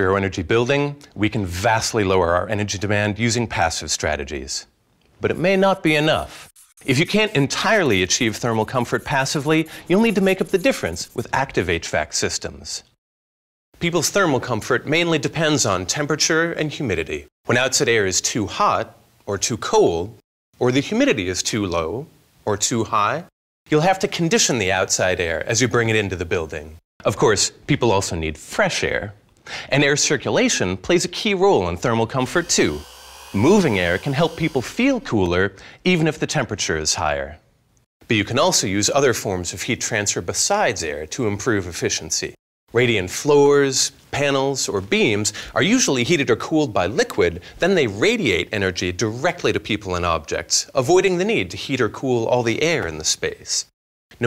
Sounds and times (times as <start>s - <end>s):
Speech: 0.0s - 13.0s, 13.8s - 32.8s, 33.4s - 37.4s, 38.1s - 54.2s.